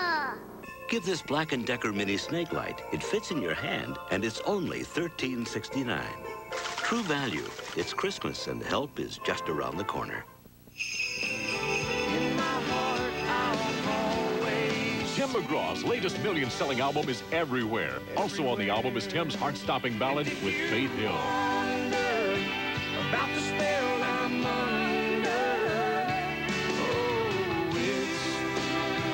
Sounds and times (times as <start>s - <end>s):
Speech: 0.0s - 6.2s, 6.8s - 10.3s, 15.2s - 21.2s
Music: 0.0s - 29.1s.